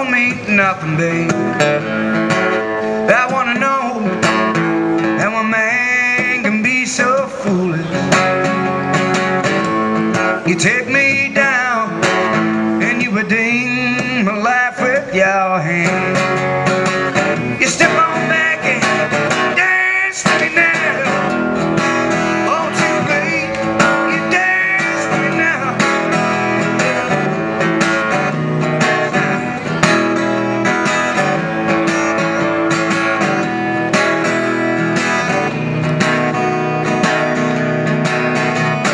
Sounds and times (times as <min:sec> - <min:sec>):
Acoustic guitar: 0:00.0 - 0:38.9.